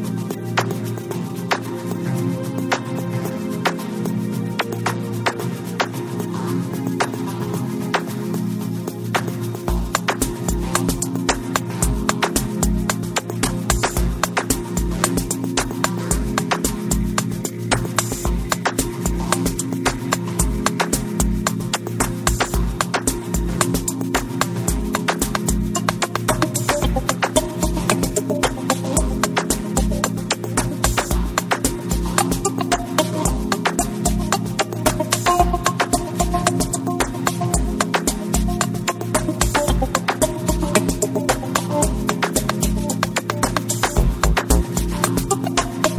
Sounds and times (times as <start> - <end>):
Music: 0.0 - 45.9.